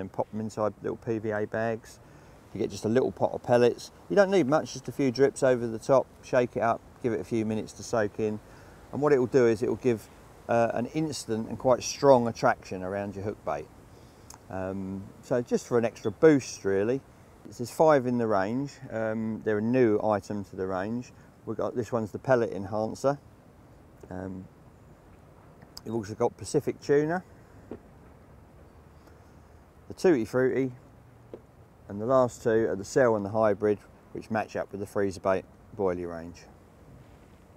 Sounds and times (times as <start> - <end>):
Speech: 0.0 - 13.7, 14.5 - 23.2, 24.1 - 24.5, 25.8 - 27.3, 29.9 - 30.8, 31.9 - 36.5.